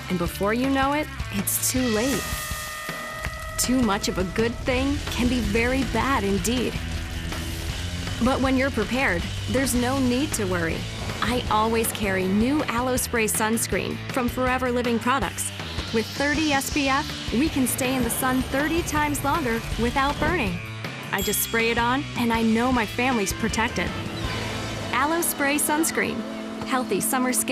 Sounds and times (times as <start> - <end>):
Music: 0.0 - 27.5
Speech: 0.1 - 2.3, 3.6 - 6.8, 8.2 - 20.6, 21.2 - 23.9, 25.0 - 27.5.